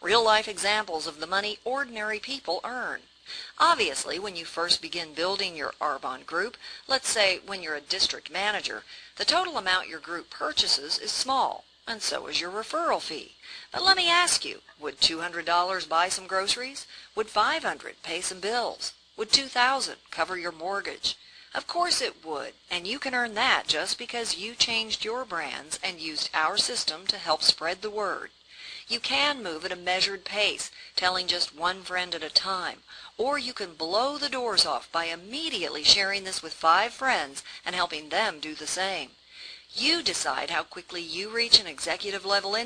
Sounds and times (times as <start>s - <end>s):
Narration, monologue: 0.0s - 42.6s.